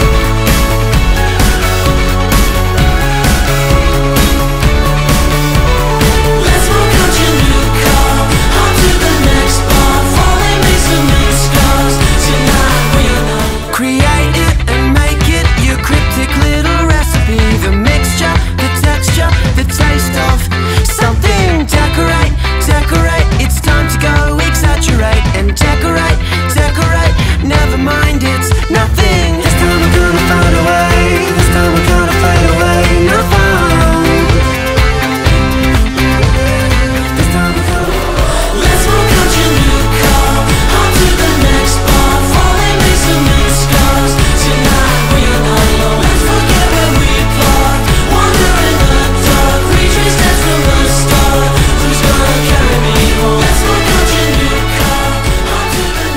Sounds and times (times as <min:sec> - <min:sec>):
Music: 0:00.0 - 0:56.1.